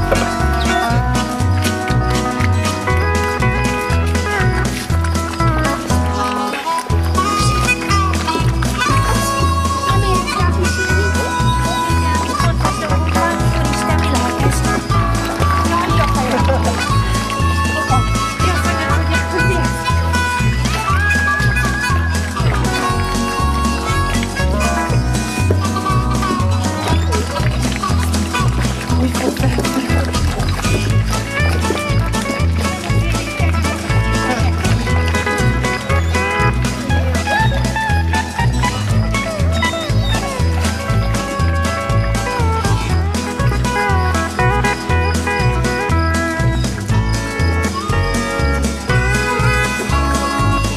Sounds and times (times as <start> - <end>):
Music: 0.0 - 50.7
Speech: 8.2 - 20.9, 28.9 - 41.1.